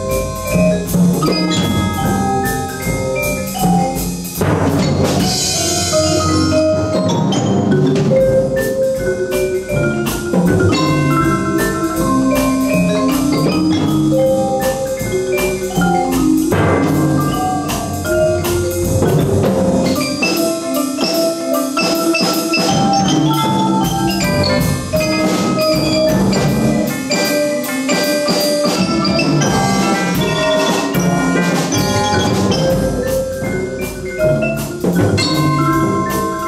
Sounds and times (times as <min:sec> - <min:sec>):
Drum: 0:00.0 - 0:36.4
Steelpan: 0:00.0 - 0:36.4
Vibraphone: 0:00.0 - 0:36.4.